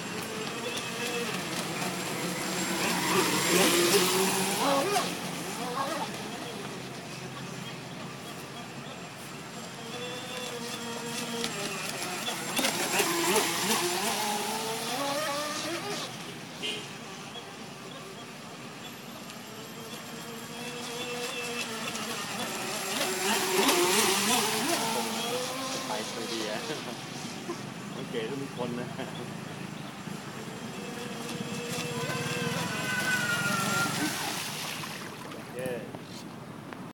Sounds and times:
Motorboat, speedboat: 0.0s - 36.9s
Speech: 28.0s - 29.3s.

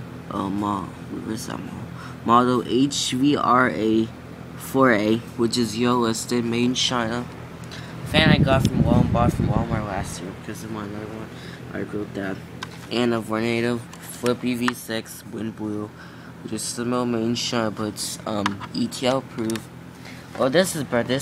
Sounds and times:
Speech: 0.3s - 7.4s, 8.1s - 19.7s, 20.4s - 21.2s.

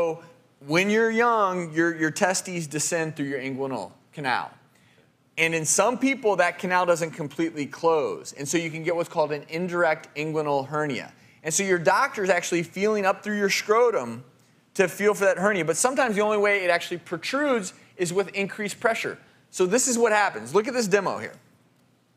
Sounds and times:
Speech: 0.0s - 4.6s, 5.4s - 21.4s.

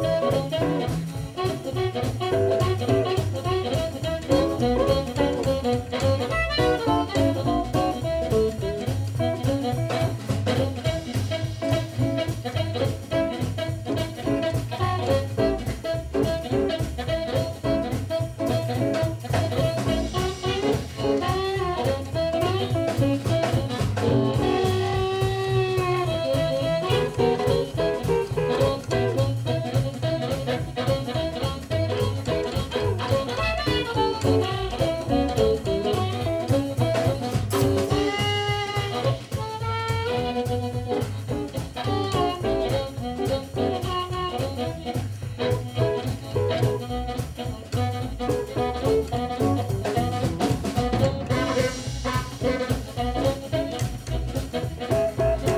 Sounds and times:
Music: 0.0s - 55.5s.

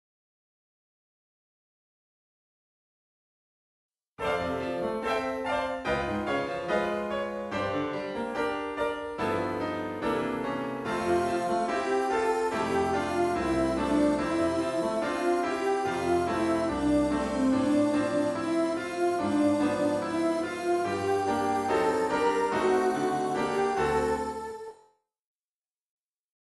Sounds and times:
Music: 4.2s - 25.1s.

